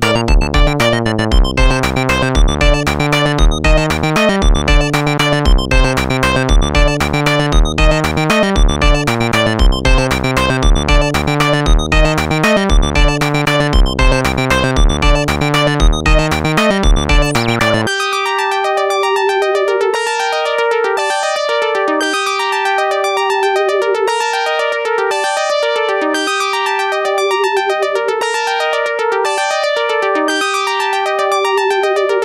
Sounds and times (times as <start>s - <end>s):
Techno: 0.0s - 17.9s
Electronica: 0.0s - 32.2s.